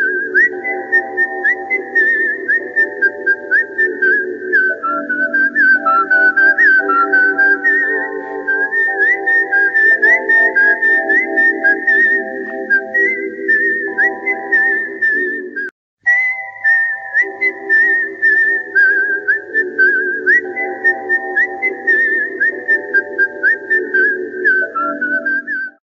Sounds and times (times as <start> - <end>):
Music: 0.0 - 25.8.